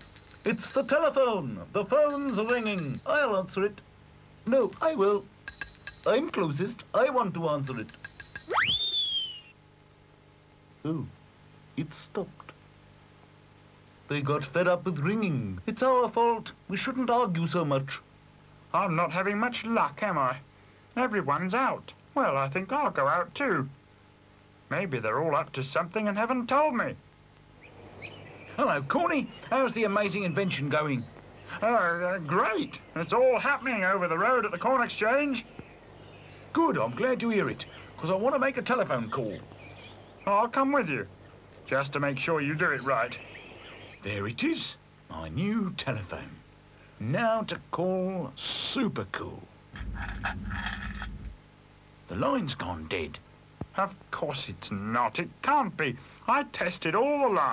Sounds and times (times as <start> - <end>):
Environmental noise: 0.0 - 57.5.